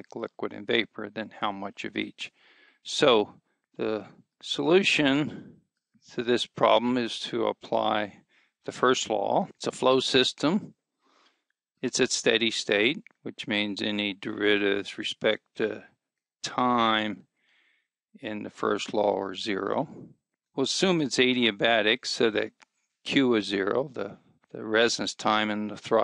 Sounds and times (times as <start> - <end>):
Speech: 0.0 - 2.3, 2.9 - 5.5, 6.2 - 10.7, 11.8 - 15.8, 16.5 - 17.2, 18.2 - 22.5, 23.1 - 26.0.